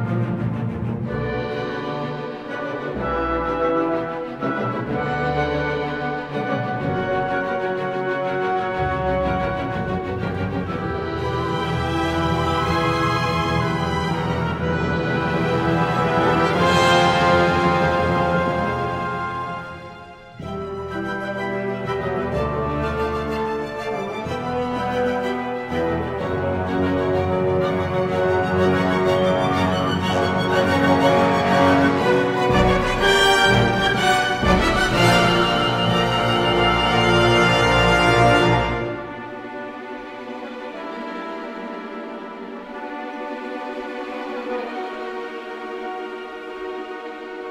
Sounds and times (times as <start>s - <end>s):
Music: 0.0s - 47.5s.